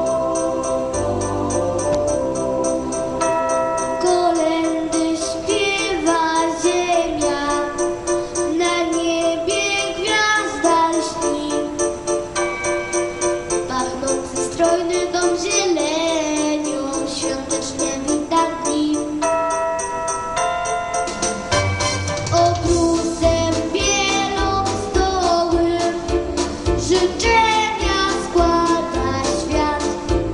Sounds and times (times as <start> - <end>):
Jingle bell: 0.0 - 9.3, 11.8 - 15.6, 16.4 - 24.4.